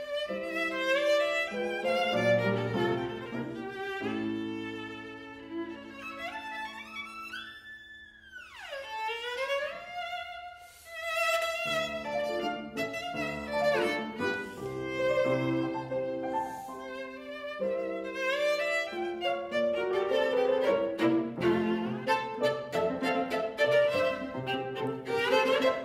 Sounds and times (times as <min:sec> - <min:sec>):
Violin, fiddle: 0:00.0 - 0:25.8.